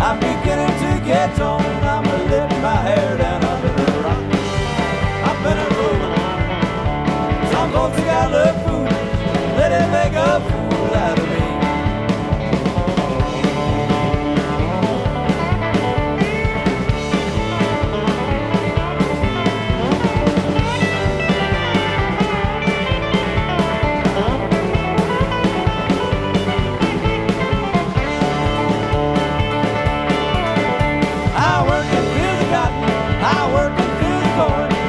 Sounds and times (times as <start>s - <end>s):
Country: 0.0s - 34.8s
Rock and roll: 0.0s - 34.8s.